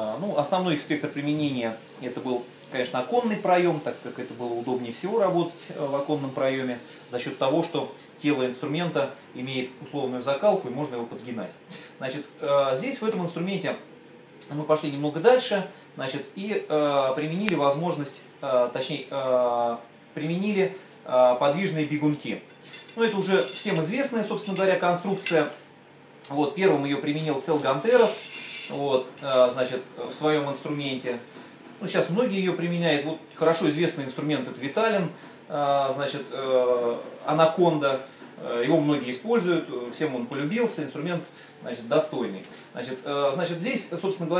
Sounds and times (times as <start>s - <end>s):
Speech: 0.0s - 25.6s, 26.2s - 44.4s
Tools: 22.5s - 25.5s, 28.0s - 28.8s.